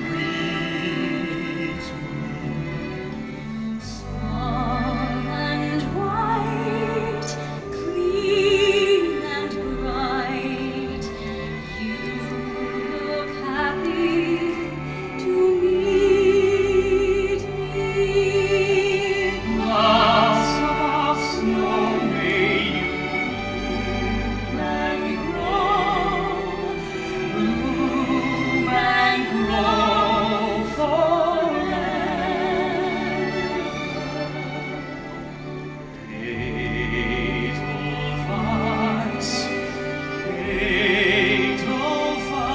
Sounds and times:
Music: 0:00.0 - 0:42.5.

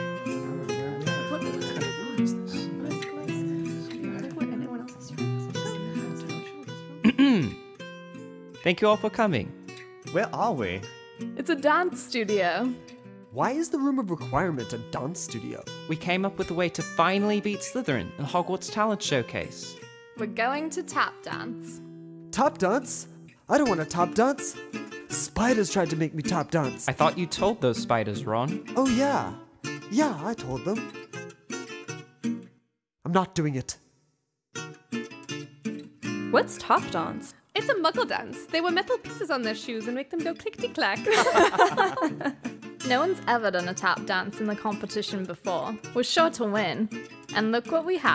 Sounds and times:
Music: 0:00.0 - 0:33.8, 0:34.6 - 0:48.1
Speech: 0:00.4 - 0:07.6, 0:08.7 - 0:09.5, 0:10.1 - 0:10.8, 0:11.4 - 0:12.8, 0:13.4 - 0:21.8, 0:22.4 - 0:30.8, 0:33.1 - 0:33.8, 0:36.4 - 0:41.2, 0:42.9 - 0:48.1.

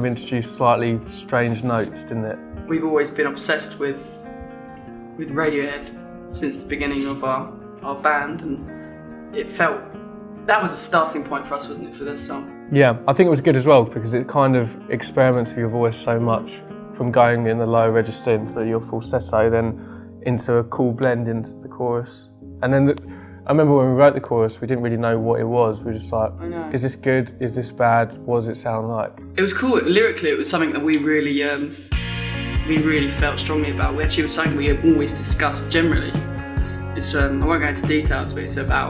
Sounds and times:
Speech: 0:00.0 - 0:04.1, 0:05.2 - 0:08.6, 0:10.5 - 0:31.7, 0:32.7 - 0:36.2, 0:37.0 - 0:38.8
Music: 0:00.0 - 0:38.8.

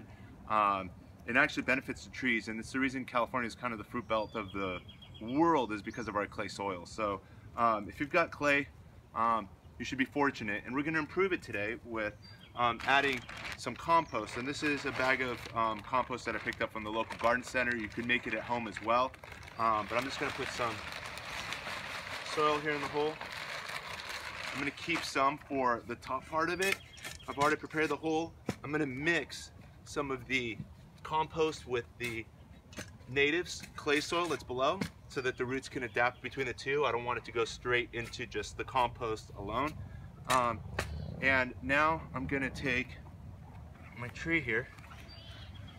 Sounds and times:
Speech: 0:00.5 - 0:20.9, 0:22.3 - 0:23.2, 0:24.6 - 0:32.3, 0:33.1 - 0:40.6, 0:41.2 - 0:43.0, 0:43.9 - 0:44.7.

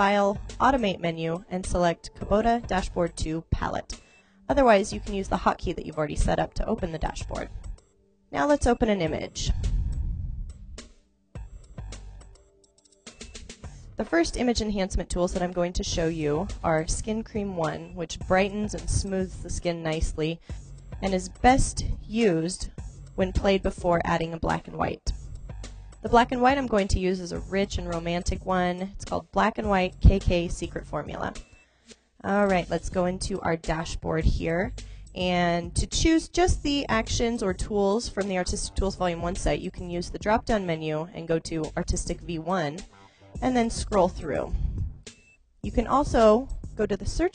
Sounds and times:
Speech: 0:00.0 - 0:07.5, 0:08.4 - 0:09.6, 0:14.0 - 0:20.4, 0:21.0 - 0:25.1, 0:26.1 - 0:31.4, 0:32.2 - 0:42.8, 0:43.4 - 0:44.6, 0:45.7 - 0:47.3
Music: 0:00.0 - 0:47.3.

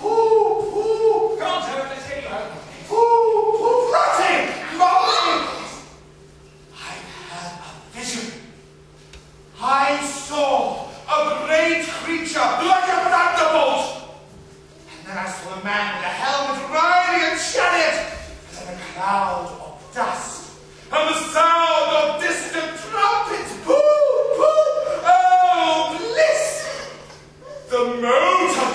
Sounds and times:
Speech: 0:00.0 - 0:05.9, 0:06.7 - 0:08.6, 0:09.6 - 0:14.2, 0:14.9 - 0:28.7.

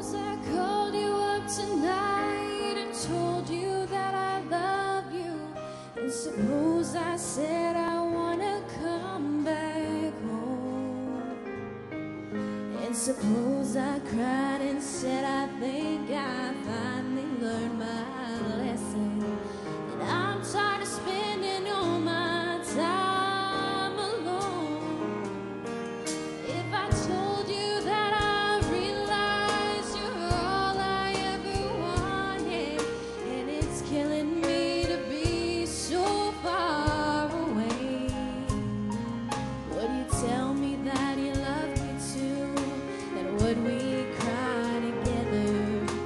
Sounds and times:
Female singing: 0:00.0 - 0:11.5, 0:12.7 - 0:25.3, 0:26.5 - 0:38.9, 0:39.6 - 0:46.0
Music: 0:00.0 - 0:46.0.

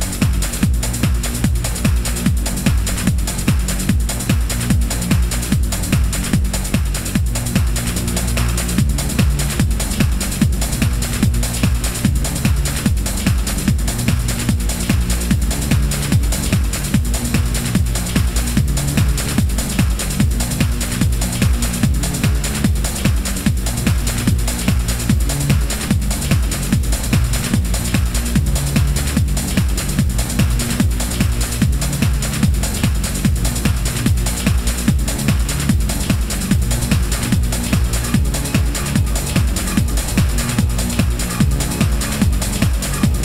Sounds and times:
Techno: 0:00.0 - 0:43.2.

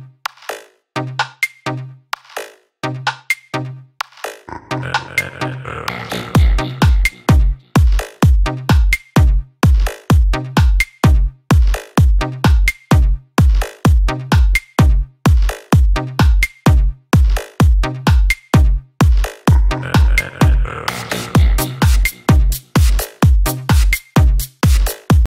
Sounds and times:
Electronica: 0:04.5 - 0:10.0, 0:15.6 - 0:25.3
Dance music: 0:04.5 - 0:25.3.

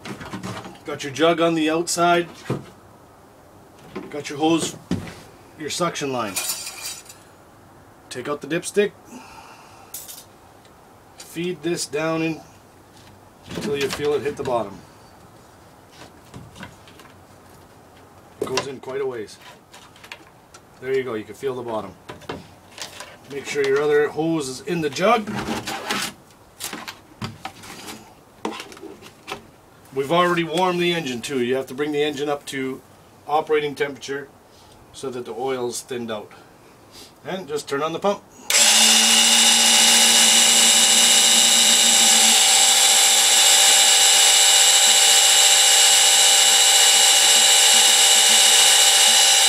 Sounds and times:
Speech: 0:00.8 - 0:02.4, 0:04.1 - 0:04.8, 0:05.6 - 0:06.4, 0:08.1 - 0:09.0, 0:11.2 - 0:12.5, 0:13.5 - 0:14.8, 0:18.4 - 0:19.4, 0:20.8 - 0:22.0, 0:23.3 - 0:25.4, 0:29.9 - 0:34.3, 0:35.0 - 0:36.4, 0:37.2 - 0:38.2.

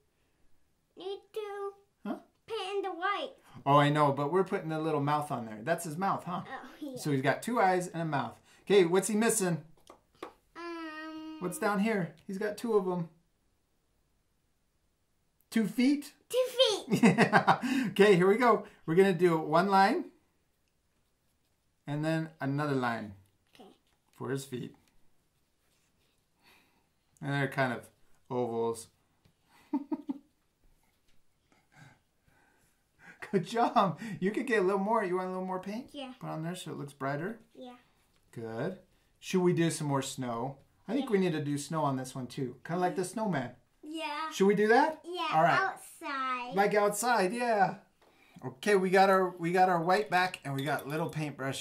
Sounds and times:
Child speech, kid speaking: 0:01.0 - 0:01.9, 0:02.5 - 0:03.4, 0:06.4 - 0:07.2, 0:10.6 - 0:11.6, 0:16.3 - 0:17.0, 0:35.8 - 0:36.3, 0:37.5 - 0:37.9, 0:40.9 - 0:41.4, 0:43.8 - 0:46.8.

